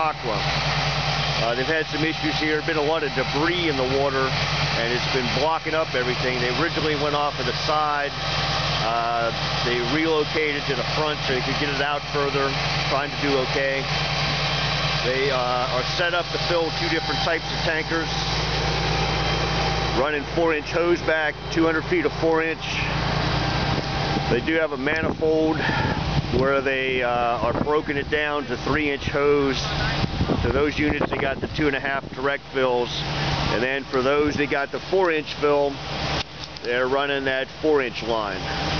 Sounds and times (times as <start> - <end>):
Speech: 0.0 - 0.5, 1.4 - 8.2, 8.8 - 13.9, 15.0 - 18.2, 20.0 - 23.0, 24.3 - 35.8, 36.6 - 38.5.